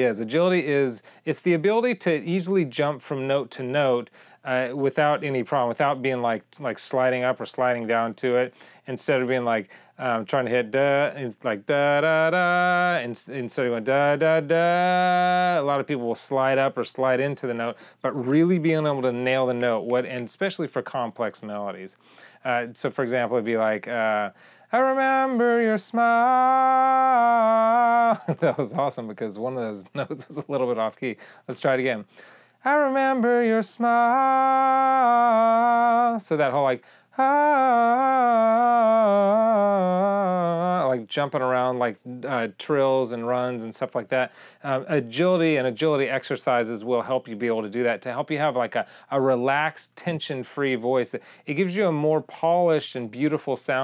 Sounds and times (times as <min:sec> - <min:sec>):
Speech: 0:00.0 - 0:26.1, 0:28.3 - 0:32.1, 0:36.2 - 0:36.8, 0:40.8 - 0:53.8
Male singing: 0:10.5 - 0:16.1, 0:24.0 - 0:28.7, 0:32.7 - 0:41.1.